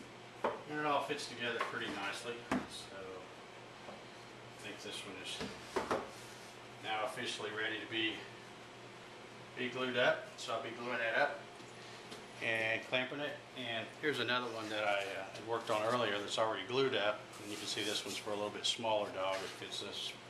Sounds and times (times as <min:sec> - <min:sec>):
Speech: 0:00.7 - 0:03.3, 0:04.6 - 0:05.5, 0:06.8 - 0:08.3, 0:09.6 - 0:11.4, 0:12.4 - 0:20.2.